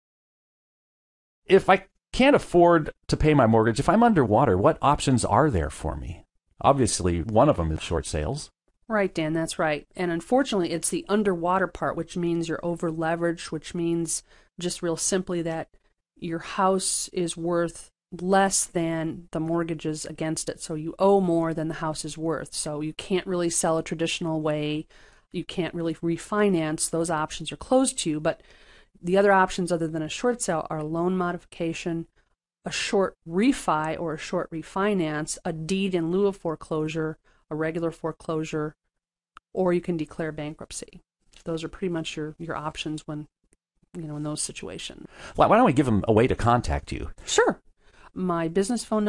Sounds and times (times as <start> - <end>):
Speech: 1.5 - 15.6, 16.2 - 24.8, 25.4 - 28.4, 29.1 - 32.0, 32.7 - 38.7, 39.5 - 43.3, 44.0 - 47.6, 48.2 - 49.0.